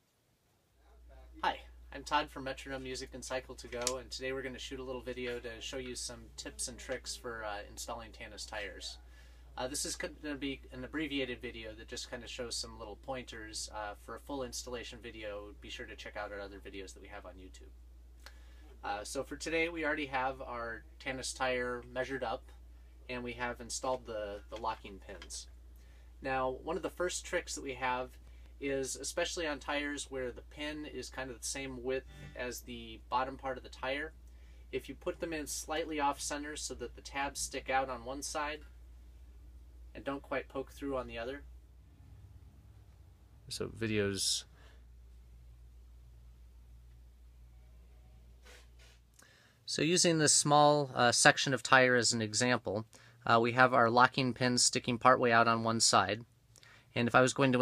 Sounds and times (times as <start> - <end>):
Speech: 0.8 - 17.7, 18.8 - 25.5, 26.2 - 38.7, 39.9 - 41.5, 43.5 - 44.5, 49.7 - 56.3, 57.0 - 57.6.